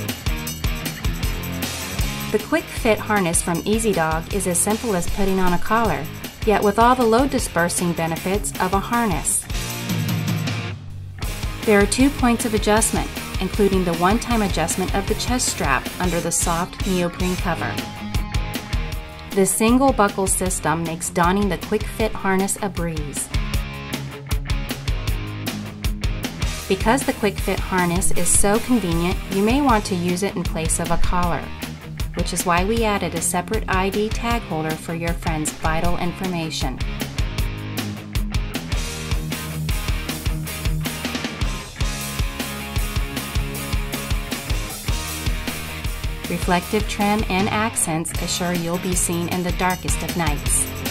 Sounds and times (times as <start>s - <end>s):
Music: 0.0s - 50.9s
Speech: 2.3s - 9.5s, 11.6s - 17.8s, 19.3s - 23.3s, 26.7s - 31.5s, 32.2s - 36.8s, 46.3s - 50.7s.